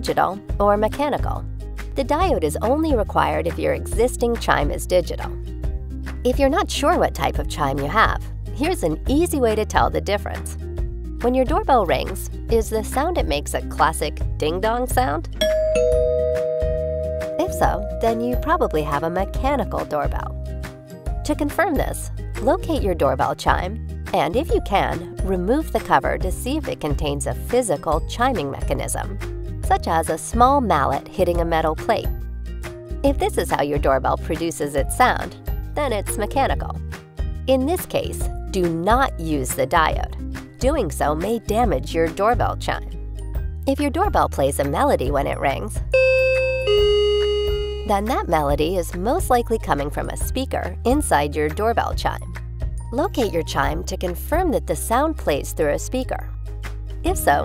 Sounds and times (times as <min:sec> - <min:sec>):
Speech: 0:00.0 - 0:01.4, 0:02.0 - 0:05.4, 0:06.3 - 0:10.5, 0:11.2 - 0:15.3, 0:17.4 - 0:20.3, 0:21.2 - 0:32.1, 0:33.0 - 0:36.8, 0:37.5 - 0:42.9, 0:43.7 - 0:45.8, 0:47.9 - 0:52.2, 0:52.9 - 0:56.3, 0:57.0 - 0:57.4
Music: 0:00.0 - 0:57.4
Doorbell: 0:15.4 - 0:20.9, 0:46.0 - 0:48.0.